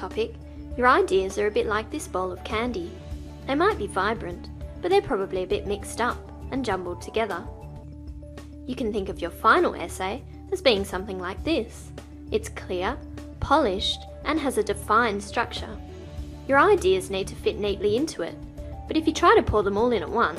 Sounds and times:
Speech: 0.0 - 7.5, 8.7 - 15.8, 16.5 - 20.3
Music: 0.0 - 20.3.

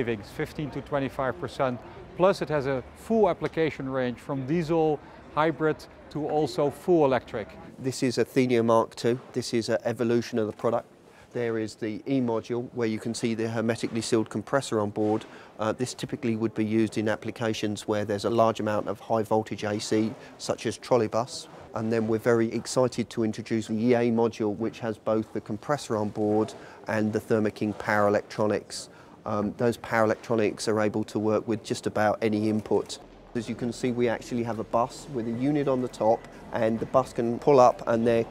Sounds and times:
Speech: 0.0 - 38.3.

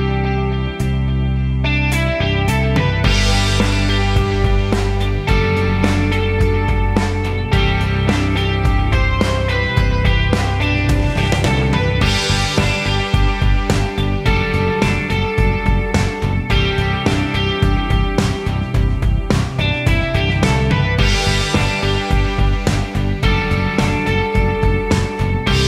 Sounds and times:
Music: 0.0 - 25.6.

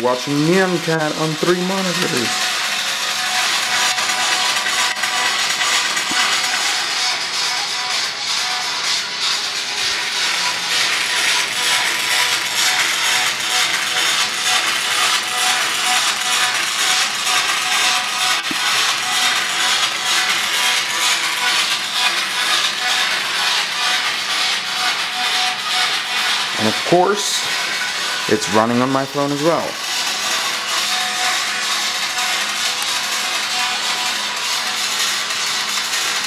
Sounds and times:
Speech: 0.0 - 2.4, 26.6 - 27.5, 28.3 - 29.8.

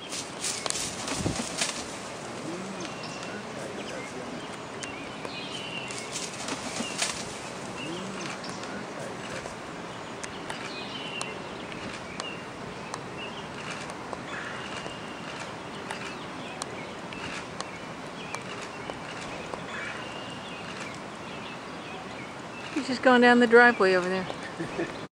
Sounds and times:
Bird: 0.0 - 25.1
Speech: 2.4 - 4.5, 7.8 - 9.5, 22.8 - 24.4.

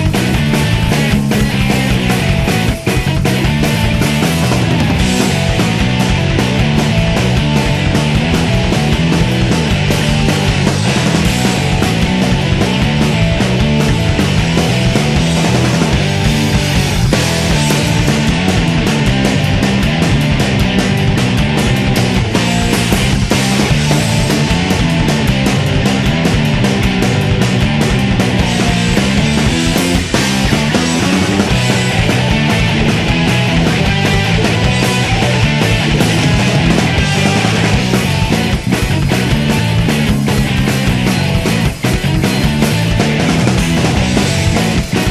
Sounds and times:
Music: 0.0 - 45.1.

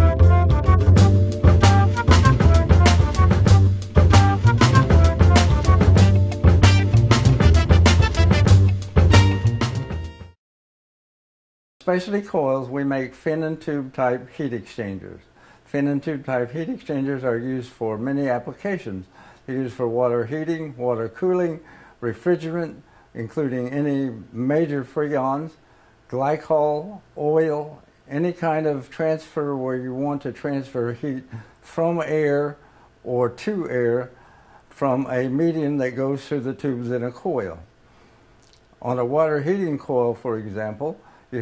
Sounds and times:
Speech: 11.8 - 37.7, 38.8 - 41.4.

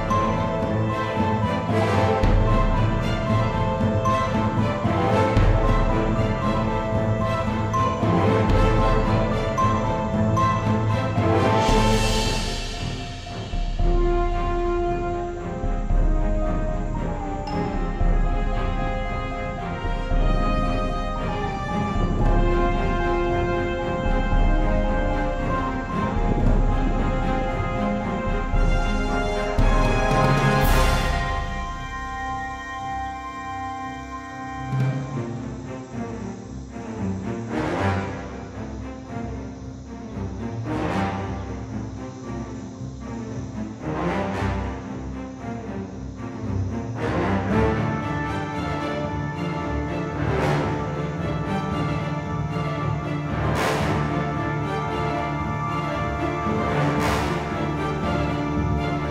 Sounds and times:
Music: 0.0 - 59.1.

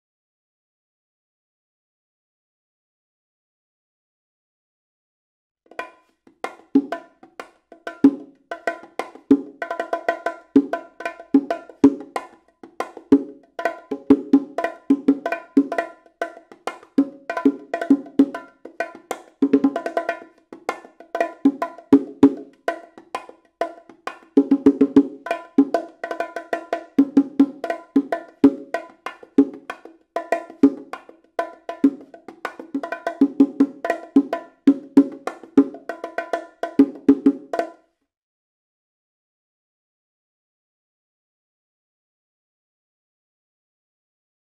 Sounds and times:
Music: 5.7 - 38.0.

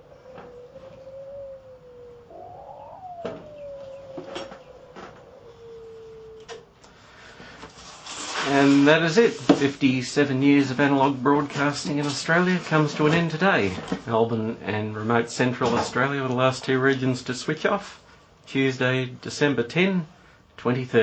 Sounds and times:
Speech: 8.4 - 21.0.

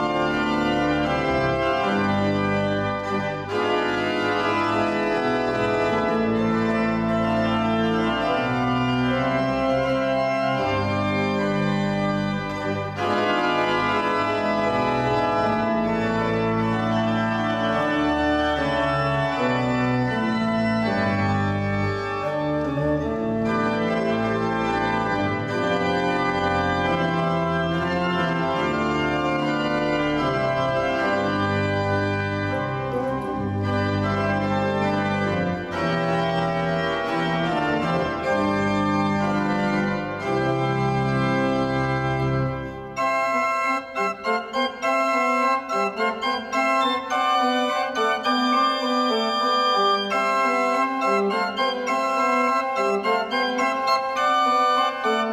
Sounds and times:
Music: 0.0 - 55.3.

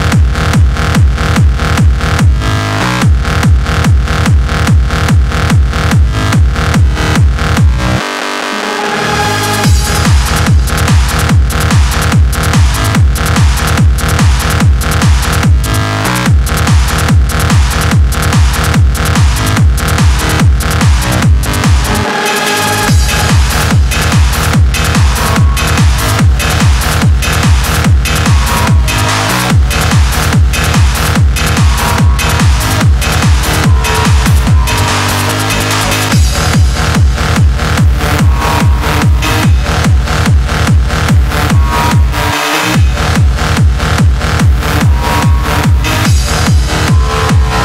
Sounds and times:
Music: 0.0 - 47.6.

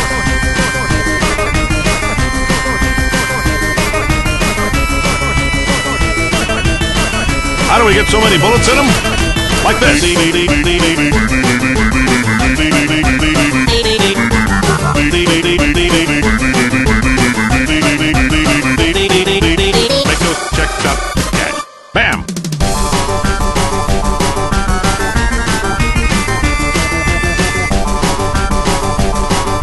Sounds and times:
Music: 0.0 - 29.6
Speech: 7.7 - 9.0, 20.1 - 22.3.

